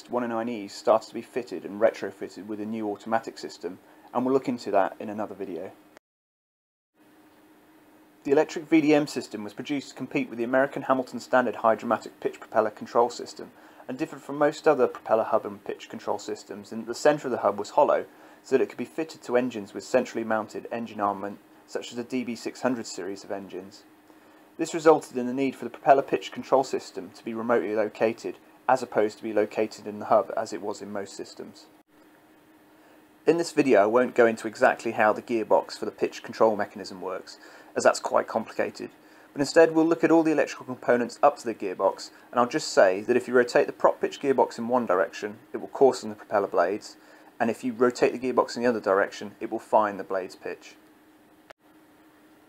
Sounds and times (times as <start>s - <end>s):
Speech: 0.0s - 5.8s, 8.3s - 23.9s, 24.6s - 31.7s, 33.3s - 50.8s.